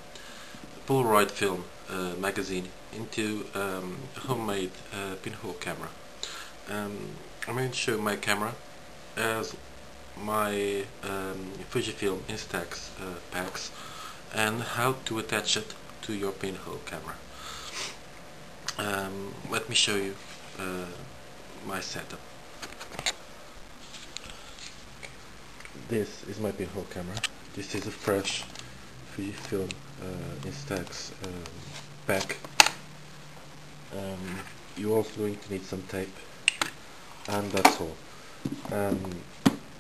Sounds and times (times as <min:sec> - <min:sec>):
Speech: 0:00.8 - 0:06.0, 0:06.7 - 0:08.6, 0:09.2 - 0:09.6, 0:10.2 - 0:17.2, 0:18.7 - 0:22.2, 0:25.8 - 0:28.5, 0:29.1 - 0:32.4, 0:33.9 - 0:36.3, 0:37.3 - 0:38.0, 0:38.7 - 0:39.3.